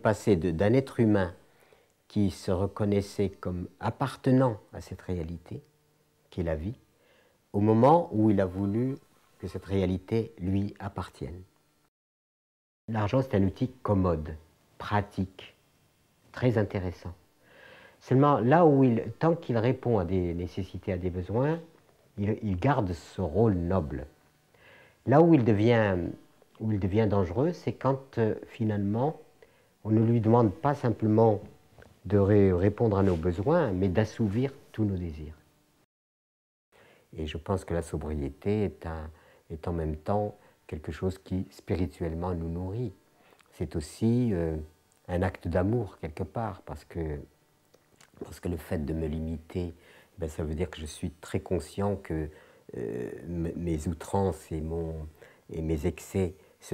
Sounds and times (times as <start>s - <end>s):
Speech: 0.0s - 1.4s, 2.1s - 5.7s, 6.3s - 6.8s, 7.5s - 11.5s, 12.9s - 15.6s, 16.3s - 17.2s, 18.0s - 24.2s, 25.0s - 35.4s, 37.1s - 47.3s, 48.0s - 56.7s.